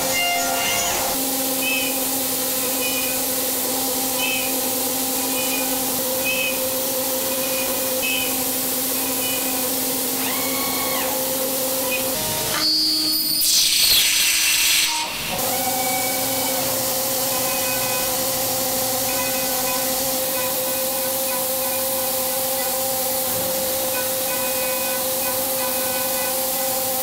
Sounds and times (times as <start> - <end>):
Engine: 0.0 - 27.0.